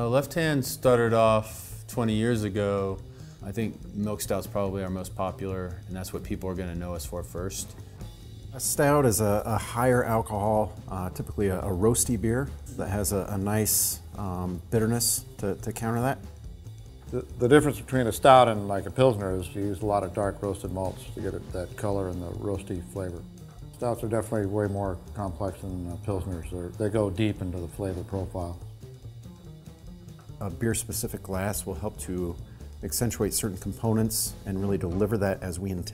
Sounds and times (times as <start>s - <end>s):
Speech: 0.0s - 7.7s, 8.6s - 16.2s, 17.1s - 28.6s, 30.4s - 35.9s
Music: 0.0s - 35.9s.